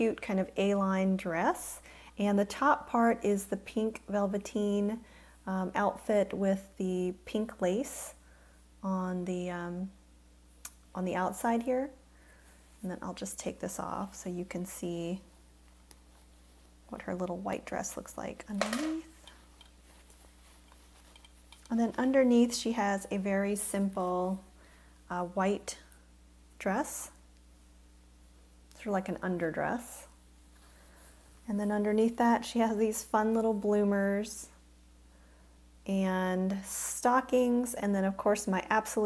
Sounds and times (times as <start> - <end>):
Speech: 0.0 - 8.2, 8.8 - 10.0, 10.9 - 12.0, 12.8 - 15.3, 16.9 - 19.2, 21.7 - 24.5, 25.1 - 25.9, 26.6 - 27.2, 28.8 - 30.2, 31.5 - 34.6, 35.9 - 39.0
Inside, small room: 0.0 - 39.0.